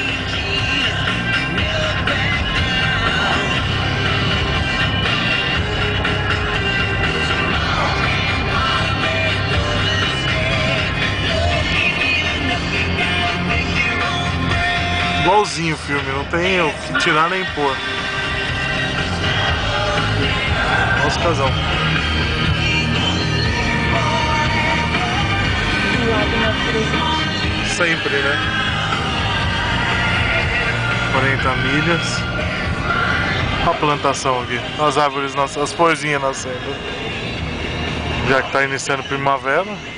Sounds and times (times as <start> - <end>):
Car: 0.0 - 39.9
Music: 0.0 - 39.9
Speech: 15.2 - 17.8, 21.0 - 21.6, 27.7 - 28.4, 31.1 - 32.2, 33.6 - 36.8, 38.2 - 39.8.